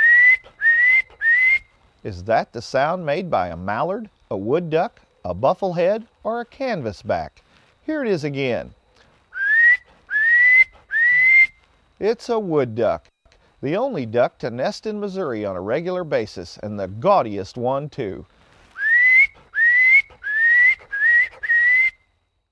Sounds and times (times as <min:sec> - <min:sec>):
Speech: 0:02.0 - 0:08.8, 0:12.0 - 0:18.3.